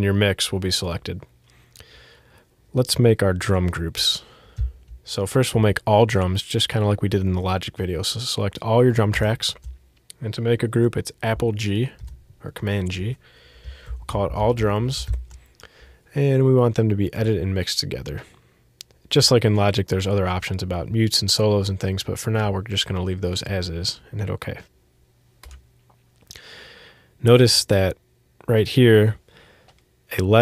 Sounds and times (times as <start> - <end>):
Speech: 0.0 - 1.3, 2.7 - 4.3, 5.1 - 13.2, 14.0 - 15.2, 16.1 - 18.4, 19.1 - 24.7, 27.2 - 29.2, 30.1 - 30.4.